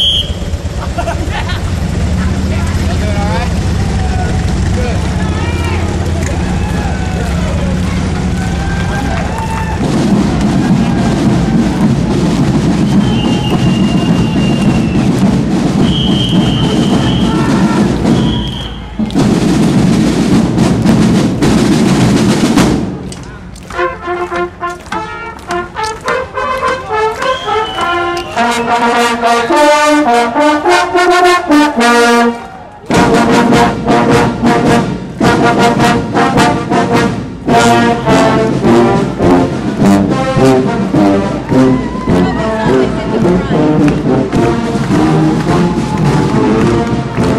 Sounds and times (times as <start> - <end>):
Crowd: 0.0 - 47.3
Music: 5.5 - 47.3.